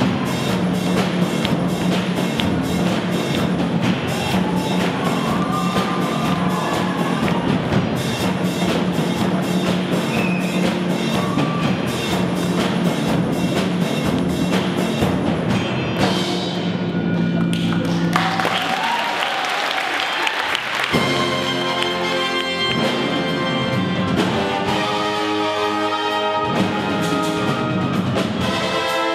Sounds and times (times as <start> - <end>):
Orchestra: 0.0 - 29.1.